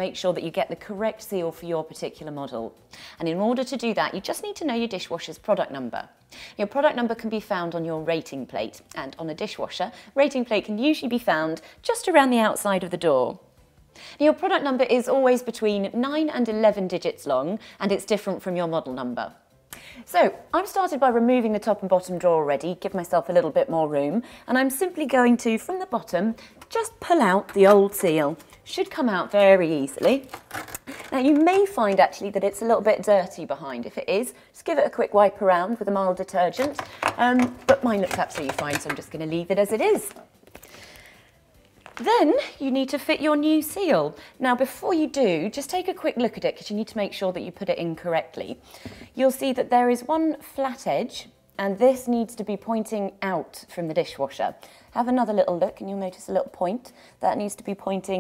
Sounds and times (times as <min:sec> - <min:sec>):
Speech: 0:00.0 - 0:13.4, 0:14.2 - 0:19.4, 0:20.1 - 0:30.3, 0:31.2 - 0:40.2, 0:42.0 - 0:48.6, 0:49.2 - 0:58.2.